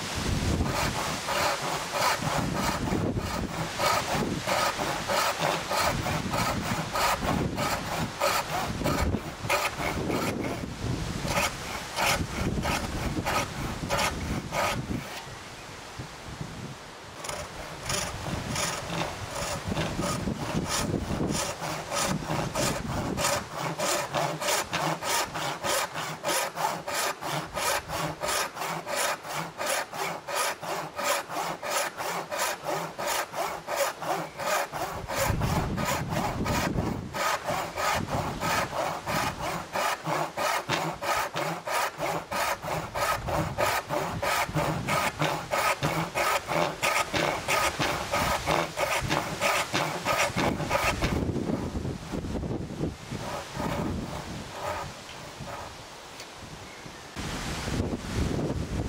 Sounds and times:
Sawing: 0.0s - 15.4s, 17.2s - 55.9s
Wood: 0.5s - 15.2s, 17.2s - 51.8s, 53.1s - 55.8s.

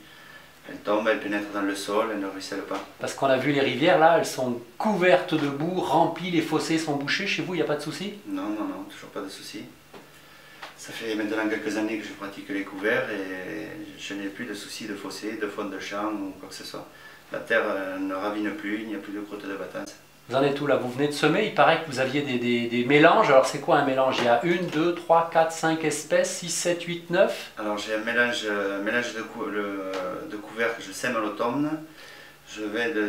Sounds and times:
Speech: 0.6s - 9.8s, 10.8s - 31.9s, 32.5s - 33.0s.

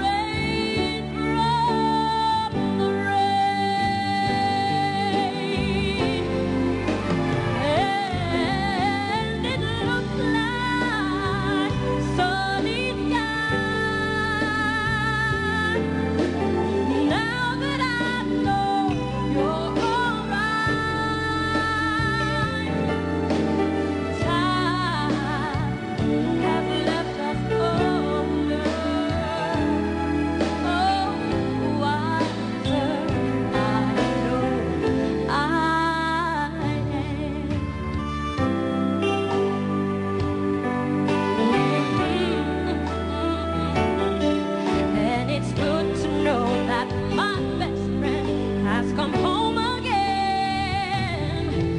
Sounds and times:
Music: 0.0s - 51.7s.

